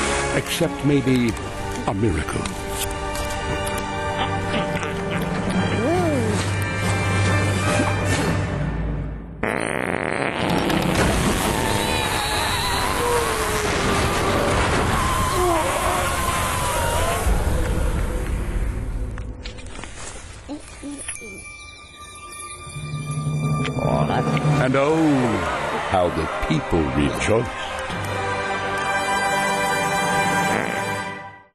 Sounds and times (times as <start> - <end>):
Music: 0.0 - 15.4, 16.1 - 31.5.